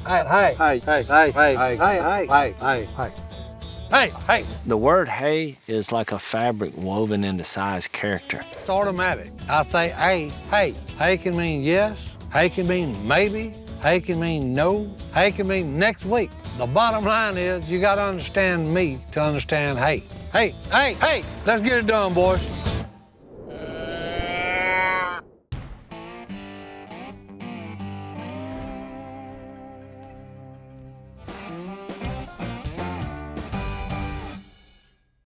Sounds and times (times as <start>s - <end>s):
Music: 0.0s - 23.2s, 25.5s - 35.2s.